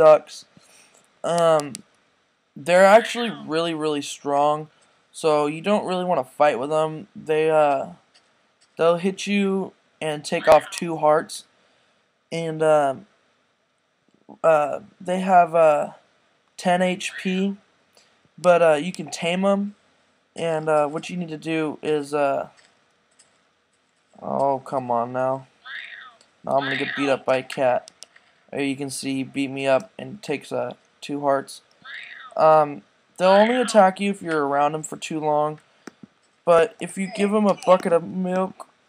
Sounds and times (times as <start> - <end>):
Speech: 0.0 - 0.5, 1.3 - 1.8, 2.6 - 8.0, 8.8 - 11.4, 12.4 - 13.1, 14.3 - 16.0, 16.6 - 17.6, 18.4 - 19.8, 20.4 - 22.5, 24.2 - 27.9, 28.6 - 35.6, 36.5 - 38.7.